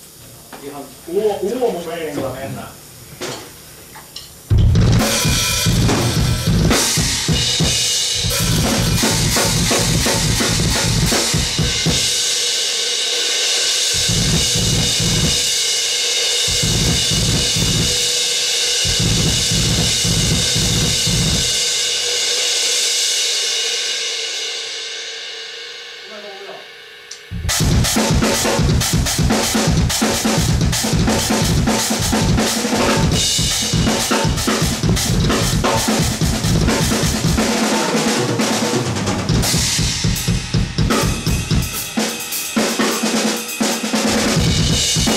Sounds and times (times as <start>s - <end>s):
Speech: 0.4s - 2.8s, 26.1s - 26.7s
Music: 4.5s - 45.1s.